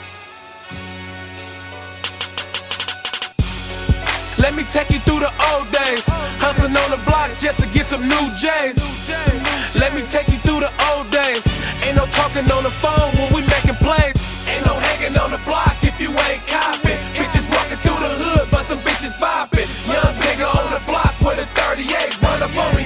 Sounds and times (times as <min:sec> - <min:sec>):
Pop music: 0:00.0 - 0:22.8.